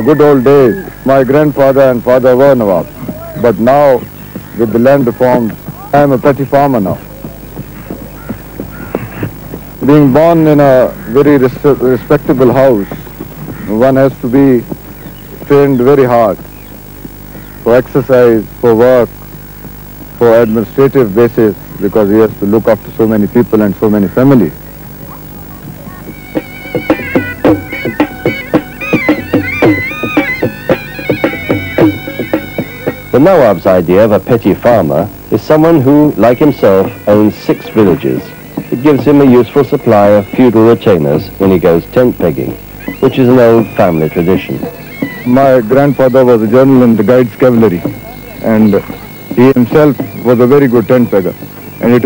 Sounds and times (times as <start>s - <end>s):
Speech: 0.0s - 7.3s, 9.8s - 13.0s, 13.7s - 14.7s, 15.5s - 16.4s, 17.7s - 19.1s, 20.2s - 26.2s, 33.2s - 44.7s, 45.3s - 52.0s.